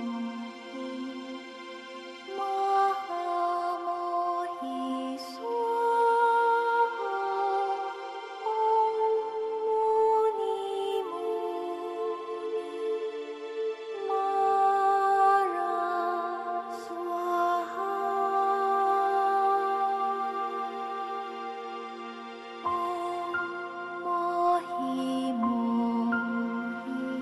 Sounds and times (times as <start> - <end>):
Mantra: 0.0 - 27.2.